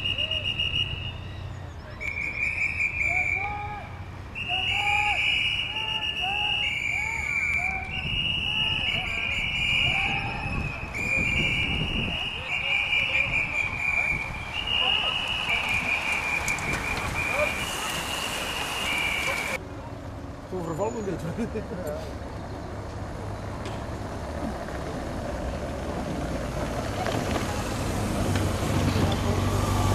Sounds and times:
Vehicle: 0.0 - 29.9
Speech: 20.5 - 22.1.

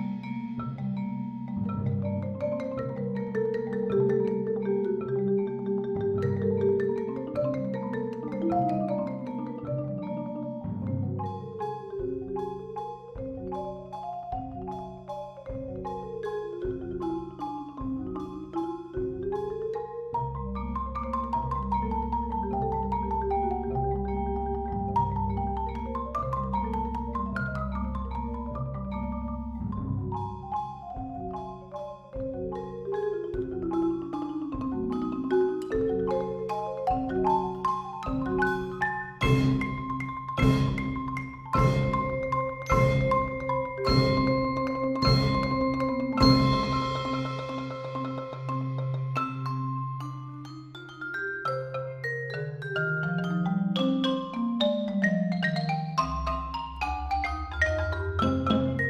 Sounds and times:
Percussion: 0.0 - 58.9.

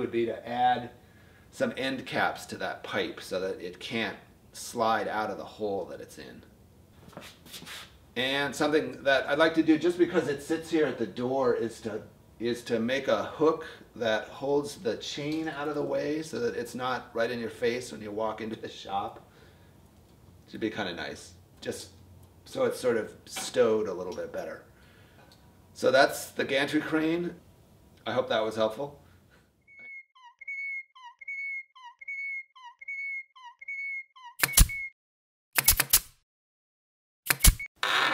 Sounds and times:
Speech: 0.0 - 1.0, 1.6 - 6.5, 8.2 - 19.2, 20.5 - 24.7, 25.8 - 27.4, 28.0 - 29.0.

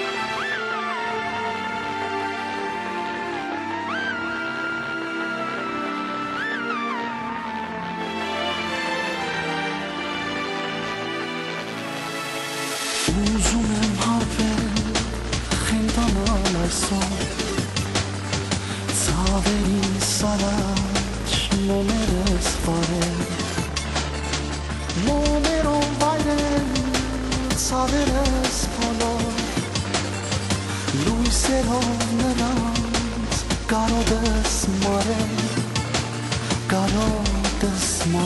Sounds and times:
Rhythm and blues: 0.0 - 38.2.

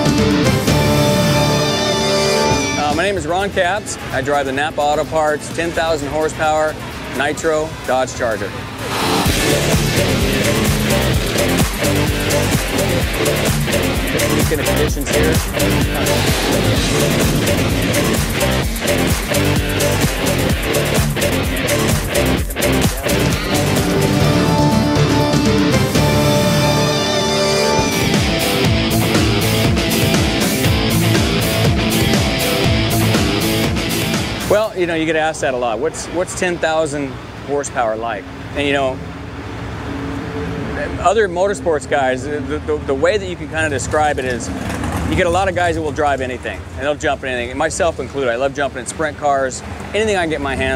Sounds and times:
Music: 0.0 - 35.0.

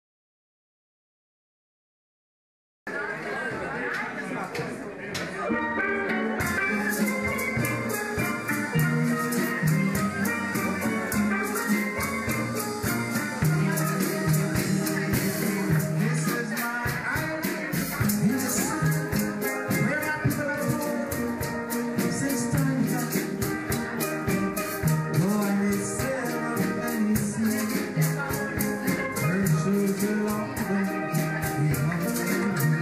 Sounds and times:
Maraca: 5.9 - 32.8
Drum: 6.1 - 32.8
Steelpan: 6.4 - 32.8.

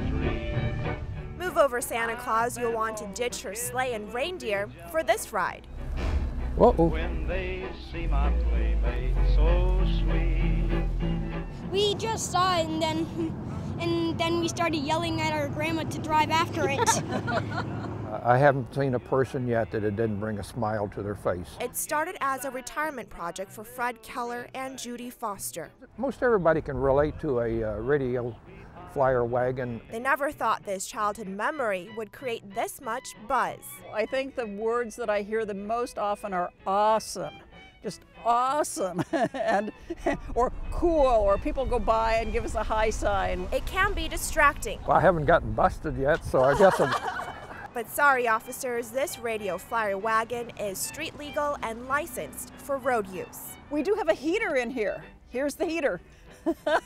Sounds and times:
Music: 0.0 - 56.8
Vehicle: 5.4 - 22.2, 25.9 - 30.7, 39.7 - 56.8.

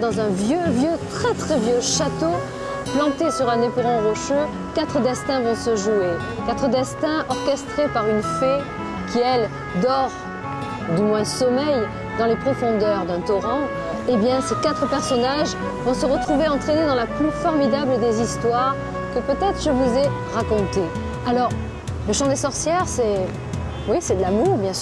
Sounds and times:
Speech: 0.0 - 2.4, 10.9 - 23.3, 23.9 - 24.8
Music: 0.0 - 24.8.

